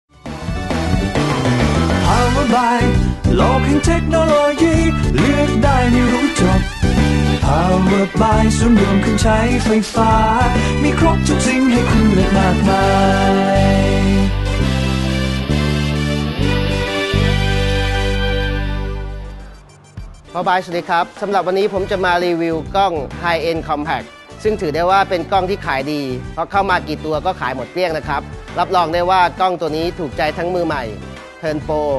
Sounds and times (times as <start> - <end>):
Happy music: 0.1 - 31.9.